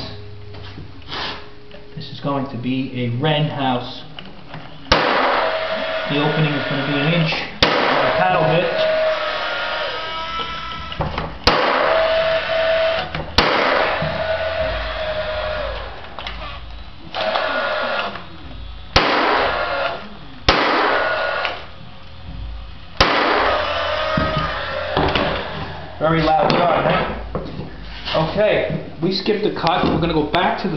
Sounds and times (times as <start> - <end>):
Speech: 6.1 - 8.9, 26.0 - 27.2, 28.1 - 30.7.